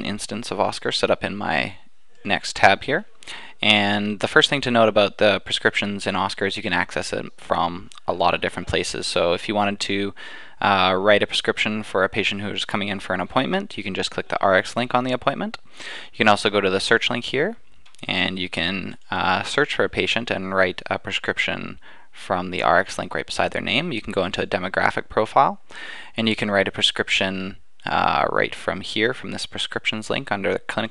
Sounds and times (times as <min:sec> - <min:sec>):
Speech: 0:00.0 - 0:25.6, 0:26.2 - 0:30.9.